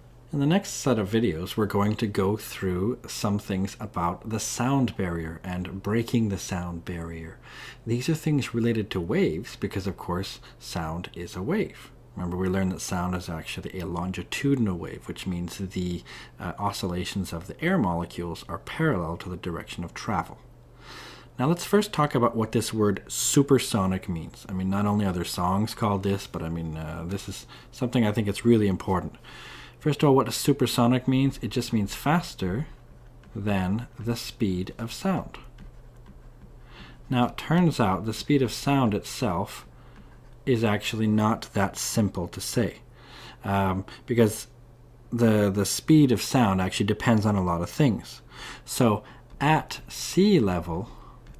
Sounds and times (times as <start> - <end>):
Speech: 0.3 - 20.5, 21.4 - 29.2, 29.8 - 35.5, 37.1 - 39.7, 40.4 - 51.0.